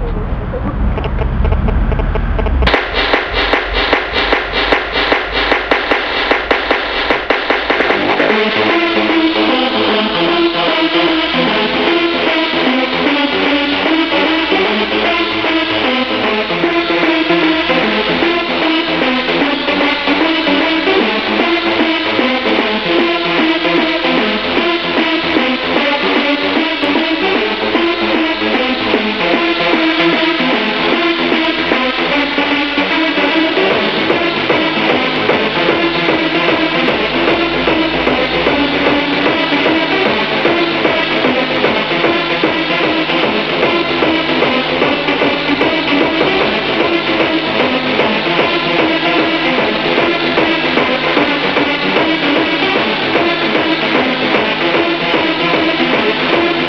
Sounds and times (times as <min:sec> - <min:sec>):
Music: 0:00.0 - 0:56.6.